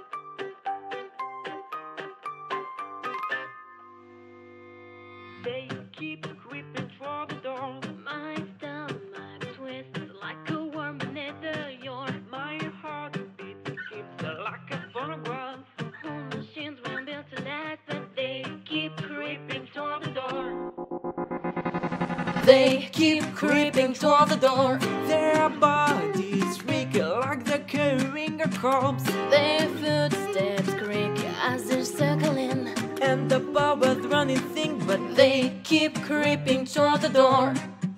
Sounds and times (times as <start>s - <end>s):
Music: 0.0s - 37.9s.